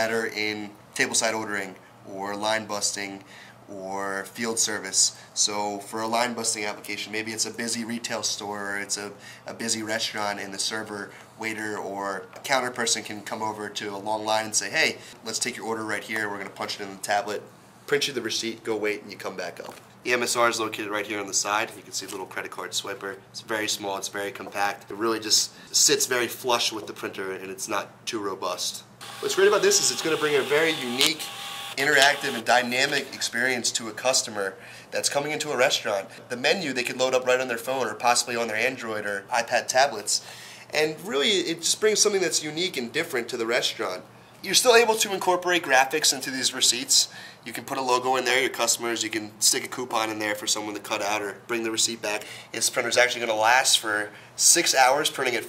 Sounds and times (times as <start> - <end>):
Speech: 0.0 - 55.4.